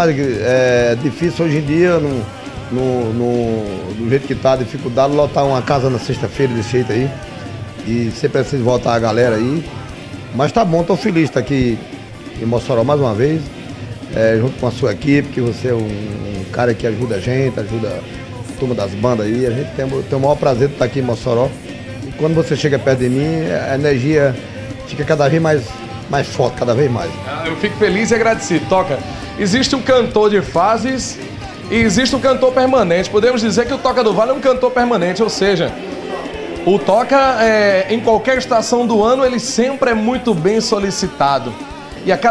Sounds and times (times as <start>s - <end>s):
Speech: 0.0s - 7.2s, 7.8s - 11.8s, 12.4s - 13.5s, 14.1s - 35.8s, 36.6s - 42.3s
Music: 0.0s - 42.3s.